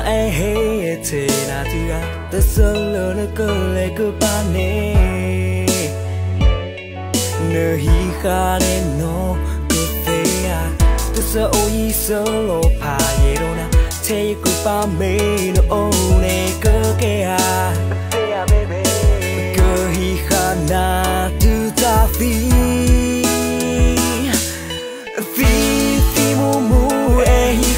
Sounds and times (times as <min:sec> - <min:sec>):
Music: 0:00.0 - 0:27.7.